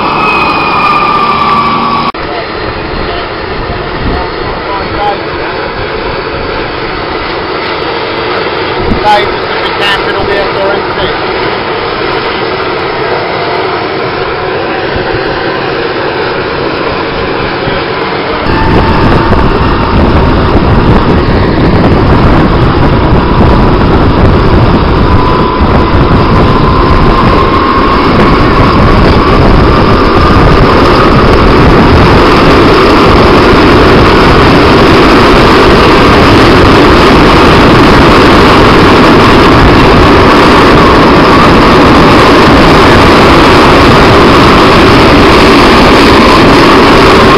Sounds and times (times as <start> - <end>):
Boat, Water vehicle: 2.2 - 21.5
Speech: 4.0 - 5.2, 9.0 - 11.2.